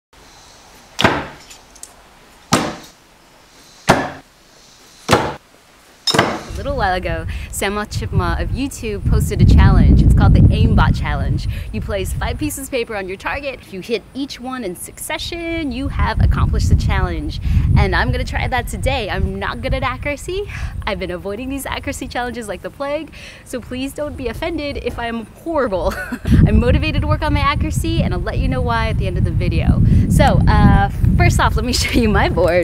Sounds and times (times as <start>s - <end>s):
Outside, rural or natural: 0.2s - 32.6s
Speech: 6.6s - 32.6s.